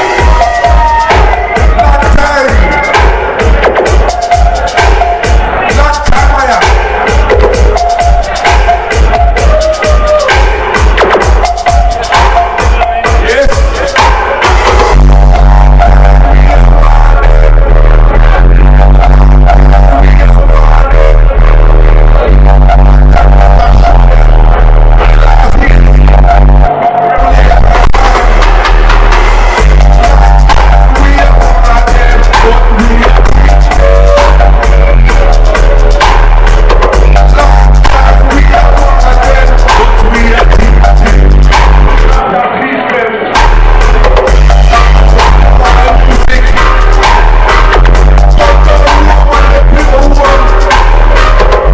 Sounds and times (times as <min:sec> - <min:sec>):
Music: 0:00.0 - 0:51.7.